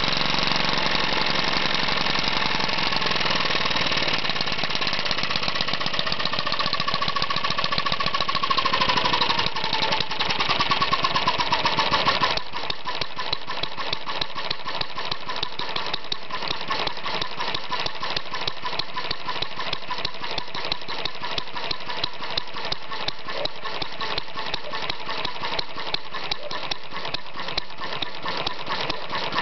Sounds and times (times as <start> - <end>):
Idling: 0.0 - 29.4
Medium engine (mid frequency): 0.0 - 29.4.